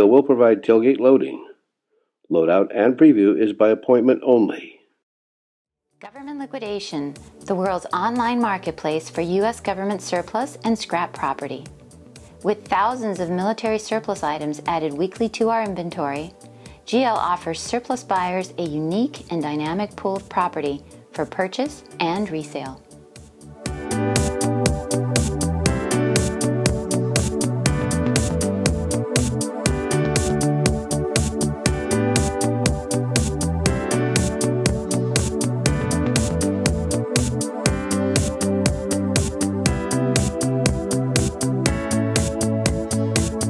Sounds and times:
Music: 0:00.0 - 0:01.3, 0:05.8 - 0:43.5
Speech: 0:00.0 - 0:01.6, 0:02.3 - 0:04.8, 0:06.0 - 0:11.7, 0:12.4 - 0:16.3, 0:16.9 - 0:22.8.

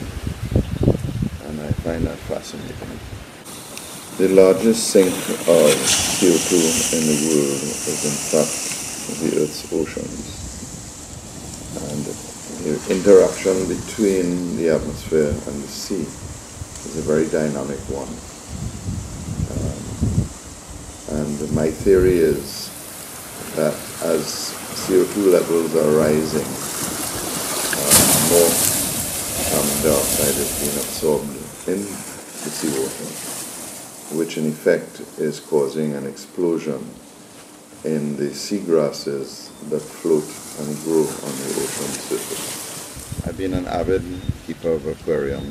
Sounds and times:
Speech: 0:01.4 - 0:03.0, 0:04.2 - 0:10.4, 0:11.8 - 0:16.2, 0:16.8 - 0:18.2, 0:19.5 - 0:20.0, 0:21.1 - 0:22.8, 0:23.4 - 0:26.6, 0:27.8 - 0:28.7, 0:29.5 - 0:33.2, 0:34.1 - 0:37.0, 0:37.8 - 0:42.5, 0:43.2 - 0:45.5.

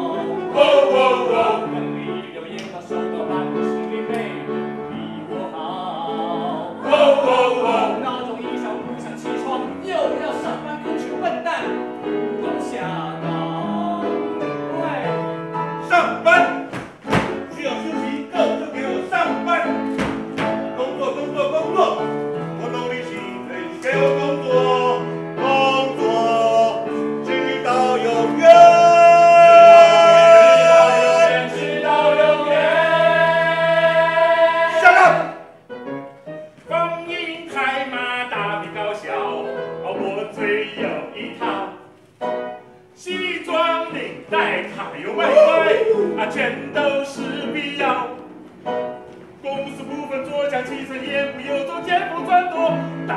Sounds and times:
Singing: 0:00.0 - 0:11.0, 0:12.4 - 0:15.1, 0:15.8 - 0:19.8, 0:20.7 - 0:35.4, 0:43.0 - 0:48.2
Music: 0:00.0 - 0:53.1.

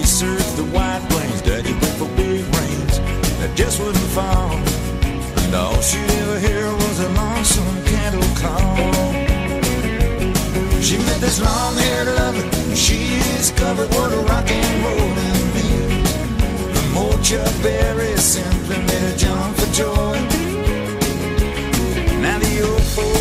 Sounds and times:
Rock and roll: 0:00.0 - 0:23.2.

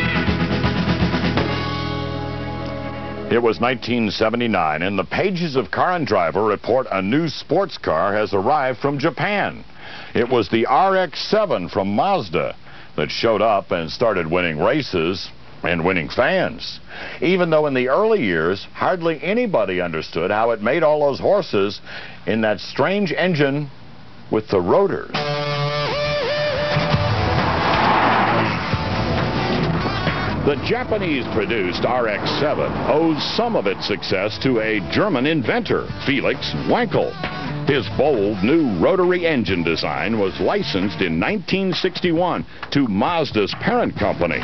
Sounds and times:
Music: 0:00.0 - 0:04.0, 0:25.1 - 0:42.0, 0:43.2 - 0:44.4
Speech: 0:03.3 - 0:09.6, 0:10.2 - 0:25.2, 0:30.4 - 0:44.4.

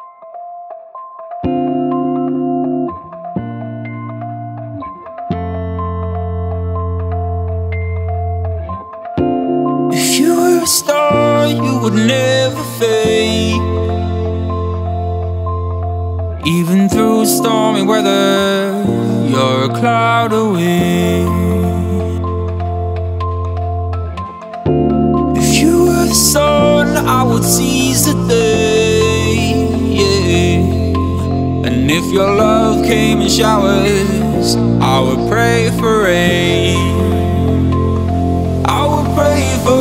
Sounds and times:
Music: 0:00.0 - 0:39.8.

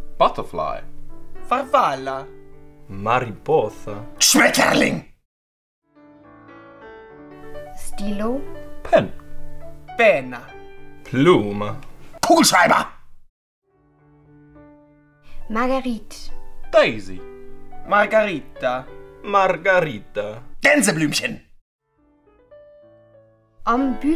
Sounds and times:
Music: 0:00.0 - 0:05.1, 0:05.8 - 0:12.8, 0:13.6 - 0:24.1
Speech: 0:00.2 - 0:00.8, 0:02.9 - 0:05.1, 0:11.1 - 0:13.0, 0:17.9 - 0:21.5, 0:23.7 - 0:24.1.

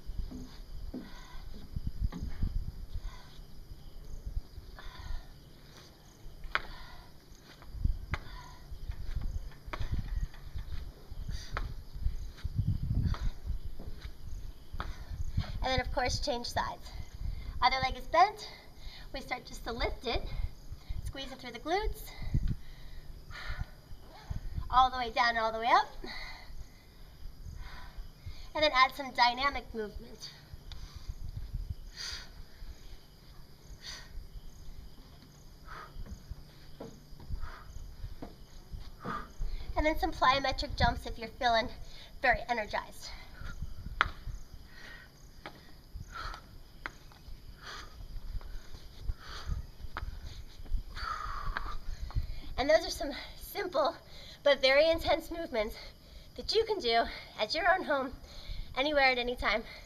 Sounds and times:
Outside, rural or natural: 0:00.0 - 0:59.8.

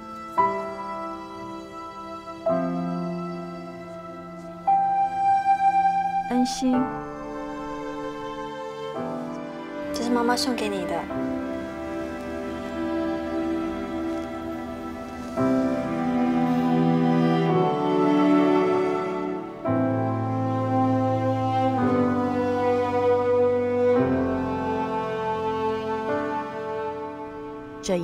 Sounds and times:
Music: 0:00.0 - 0:28.0.

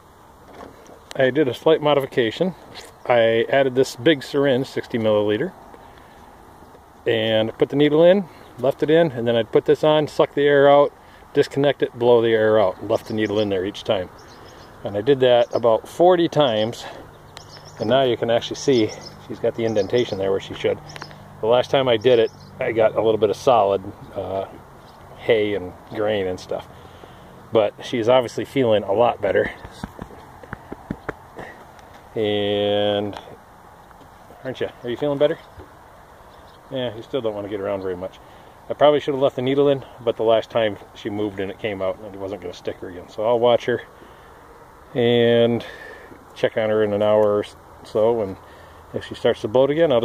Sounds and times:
Outside, rural or natural: 0:00.0 - 0:50.0
Speech: 0:01.1 - 0:05.6, 0:07.0 - 0:14.1, 0:14.8 - 0:17.0, 0:17.8 - 0:20.8, 0:21.4 - 0:24.6, 0:25.2 - 0:26.7, 0:27.5 - 0:30.0, 0:32.2 - 0:33.4, 0:34.4 - 0:35.5, 0:36.7 - 0:43.9, 0:44.9 - 0:50.0.

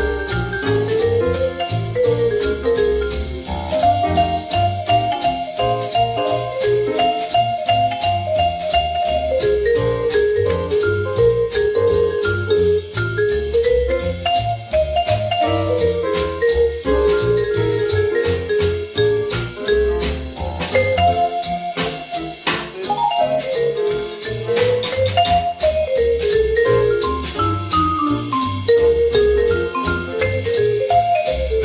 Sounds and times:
Music: 0:00.0 - 0:31.6.

